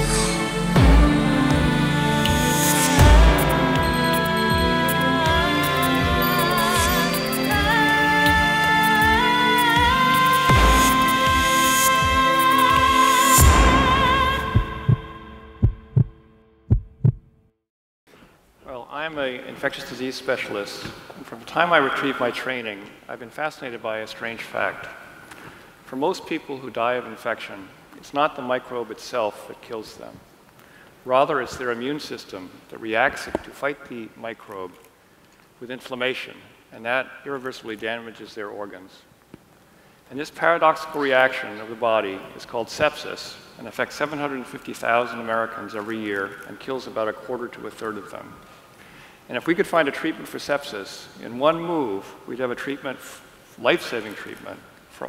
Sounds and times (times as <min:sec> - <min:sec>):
Speech: 0:18.6 - 0:25.0, 0:25.9 - 0:30.2, 0:31.1 - 0:34.8, 0:35.6 - 0:39.1, 0:40.1 - 0:48.4, 0:49.3 - 0:55.0.